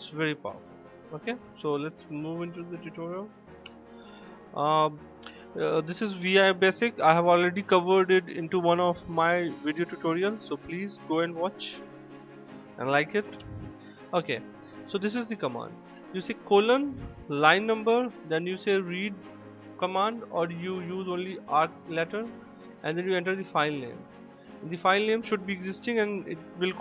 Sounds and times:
Speech: 0:00.0 - 0:00.6, 0:01.2 - 0:03.3, 0:04.6 - 0:05.0, 0:05.6 - 0:11.8, 0:12.8 - 0:19.2, 0:19.8 - 0:24.0, 0:24.7 - 0:26.8
Music: 0:00.0 - 0:26.8.

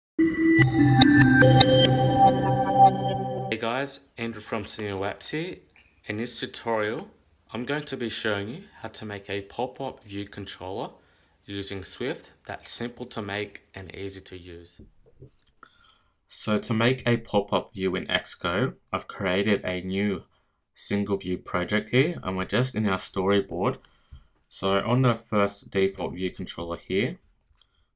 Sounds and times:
Music: 0:00.2 - 0:03.5
Speech: 0:03.5 - 0:14.9, 0:16.3 - 0:23.8, 0:24.5 - 0:27.2.

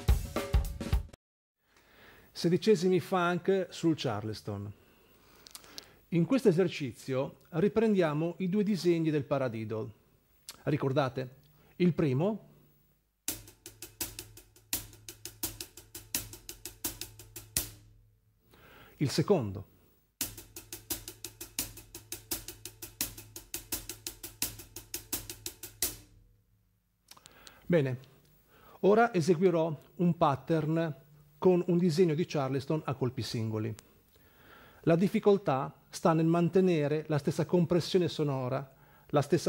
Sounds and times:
Speech: 0:02.4 - 0:04.8, 0:06.1 - 0:12.5, 0:19.0 - 0:19.7, 0:27.7 - 0:28.1, 0:28.8 - 0:33.8, 0:34.8 - 0:39.4.

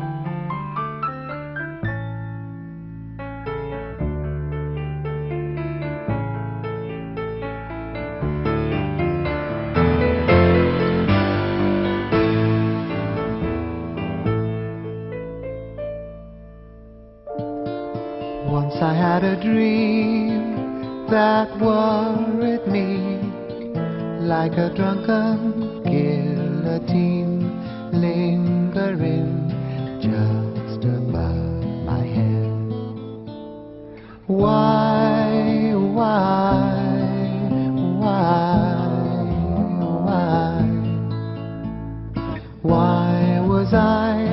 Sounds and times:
Music: 0:00.0 - 0:44.3.

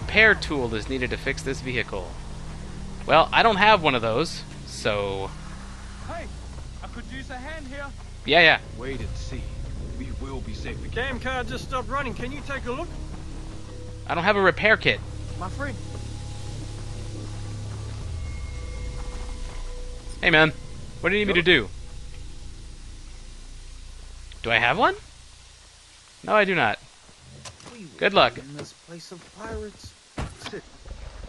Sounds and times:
Speech: 0:00.1 - 0:02.1, 0:03.1 - 0:05.3, 0:06.1 - 0:12.9, 0:14.1 - 0:15.8, 0:20.2 - 0:21.7, 0:24.4 - 0:25.0, 0:27.7 - 0:30.6.

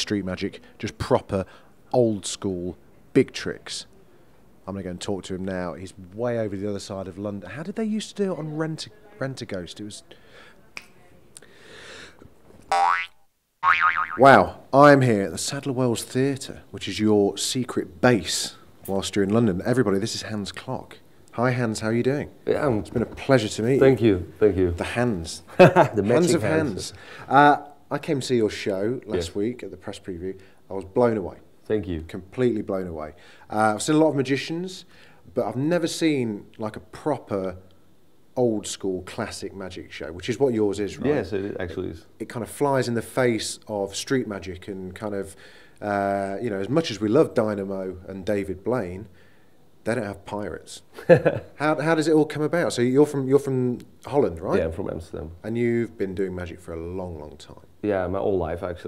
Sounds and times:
Boing: 0:12.7 - 0:14.3
Speech: 0:14.2 - 0:37.6, 0:38.4 - 0:49.1, 0:49.8 - 0:50.9, 0:51.6 - 0:58.8.

